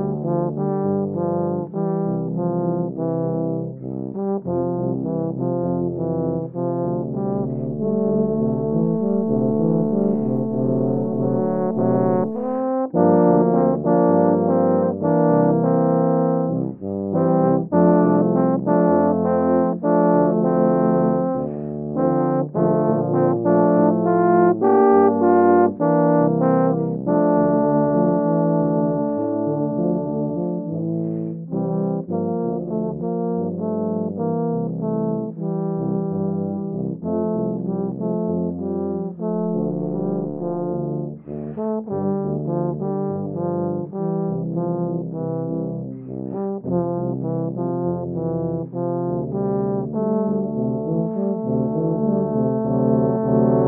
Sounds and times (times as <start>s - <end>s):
Brass instrument: 0.0s - 53.6s
Jazz: 3.8s - 53.6s.